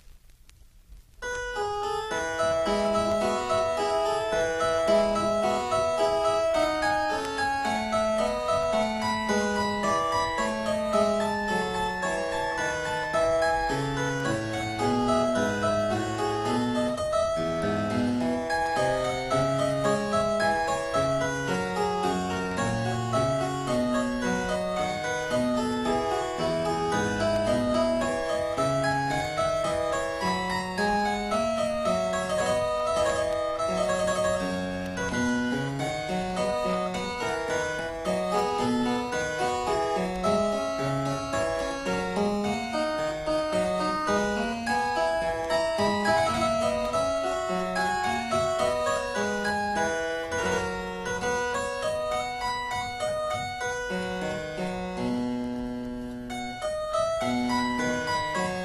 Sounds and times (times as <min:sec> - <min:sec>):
Piano: 0:00.0 - 0:58.6.